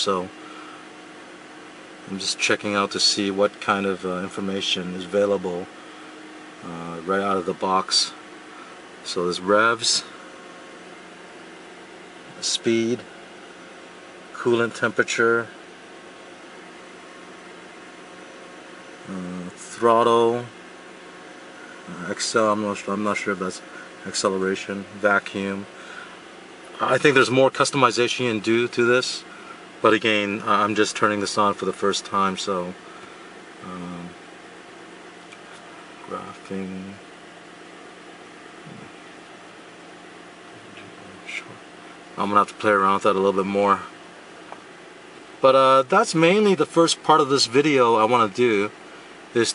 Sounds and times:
Speech: 0:00.0 - 0:00.3, 0:02.0 - 0:05.7, 0:06.6 - 0:08.2, 0:09.0 - 0:10.2, 0:12.3 - 0:13.1, 0:14.4 - 0:15.6, 0:19.0 - 0:20.6, 0:21.9 - 0:25.7, 0:26.8 - 0:32.8, 0:33.6 - 0:34.2, 0:36.0 - 0:37.0, 0:40.7 - 0:41.6, 0:42.2 - 0:44.0, 0:45.4 - 0:48.8.

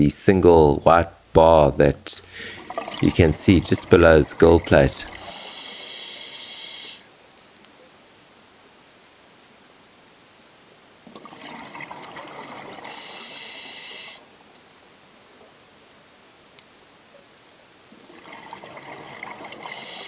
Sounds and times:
Water: 0:01.8 - 0:20.0.

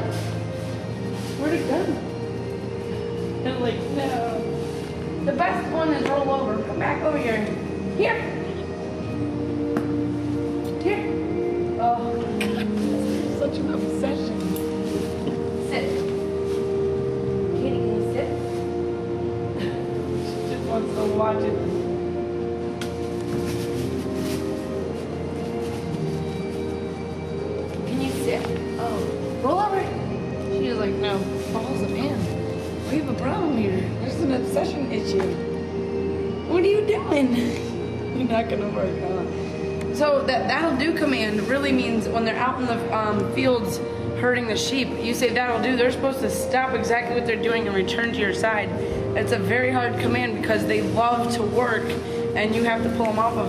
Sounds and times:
Music: 0:00.0 - 0:53.4
Female speech, woman speaking: 0:03.4 - 0:04.5, 0:05.2 - 0:08.4, 0:10.8 - 0:11.2, 0:11.8 - 0:14.6, 0:15.6 - 0:16.0, 0:17.5 - 0:18.4, 0:20.3 - 0:21.8, 0:27.9 - 0:35.4, 0:36.5 - 0:39.3, 0:40.0 - 0:53.4.

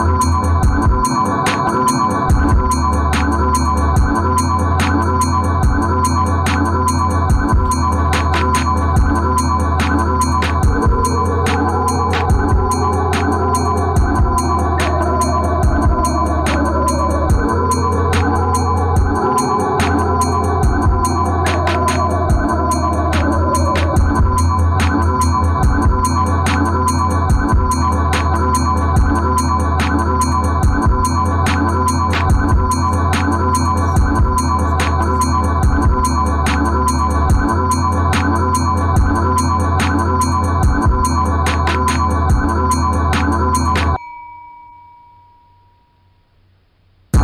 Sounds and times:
Music: 0:00.0 - 0:44.0.

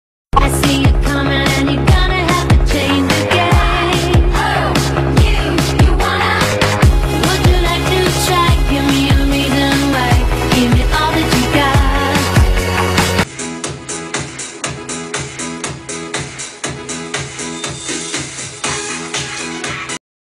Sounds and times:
Music: 0:00.3 - 0:20.0.

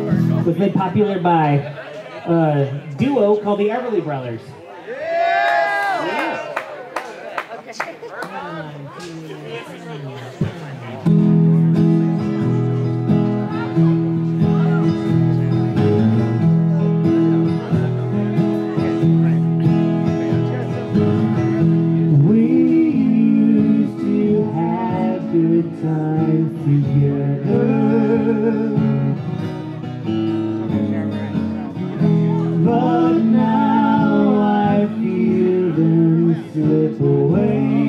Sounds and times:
Country: 0:00.0 - 0:37.8.

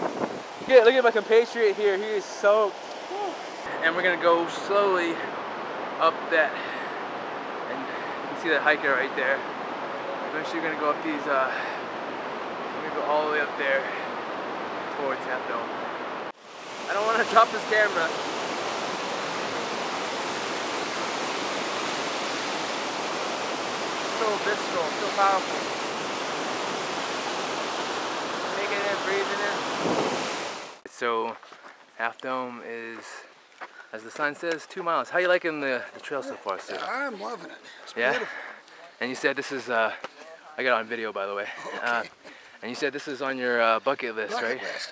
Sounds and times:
Waterfall: 0:00.0 - 0:31.1, 0:34.0 - 0:44.9.

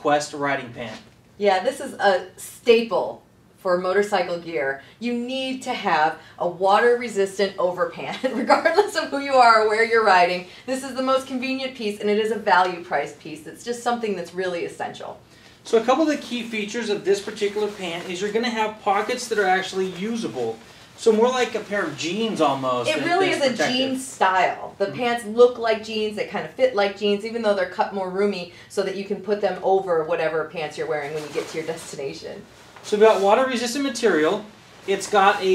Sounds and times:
Speech: 0:00.0 - 0:35.5.

